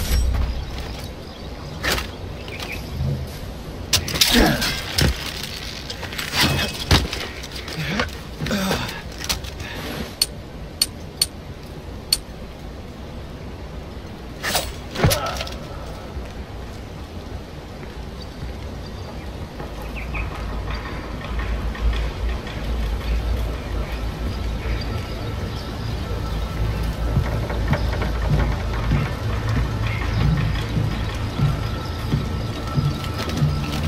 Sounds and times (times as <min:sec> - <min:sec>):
Outside, rural or natural: 0:00.0 - 0:33.8.